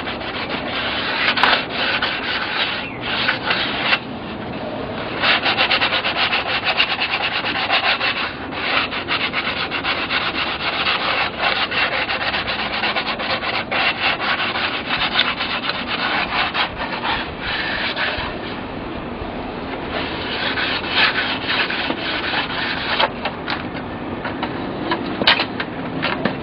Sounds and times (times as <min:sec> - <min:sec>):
Filing (rasp): 0:00.0 - 0:04.1, 0:05.0 - 0:18.6, 0:19.9 - 0:23.1
Rub: 0:00.0 - 0:04.4, 0:05.0 - 0:18.6, 0:19.9 - 0:23.1.